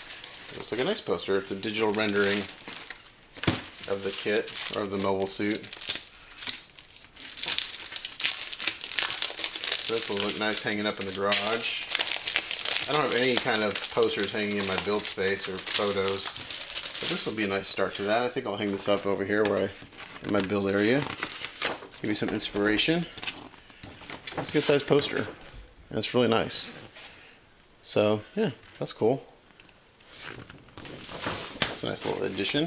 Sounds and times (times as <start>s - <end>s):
Crumpling, crinkling: 0.0s - 25.4s, 30.0s - 32.6s
Inside, small room: 0.0s - 32.6s
Speech: 0.5s - 2.5s, 12.9s - 16.3s, 17.0s - 21.1s, 24.4s - 26.8s, 27.8s - 29.3s, 31.8s - 32.6s.